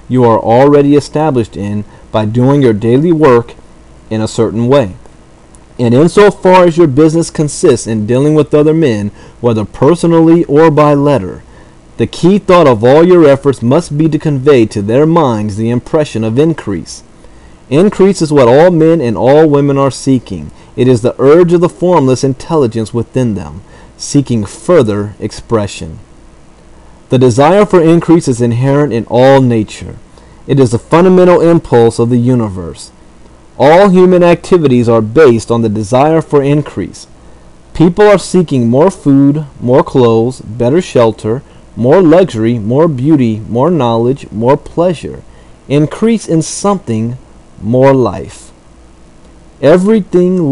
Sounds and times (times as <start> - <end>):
Narration, monologue: 0.0 - 50.5.